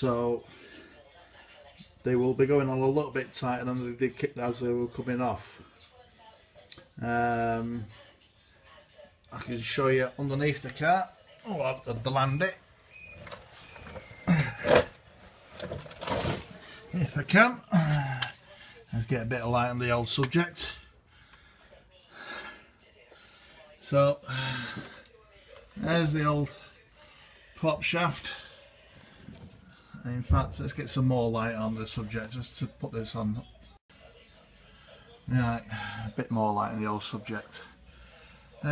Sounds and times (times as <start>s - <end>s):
Speech: 0.0s - 12.6s, 16.6s - 20.9s, 21.8s - 28.7s, 29.9s - 38.7s.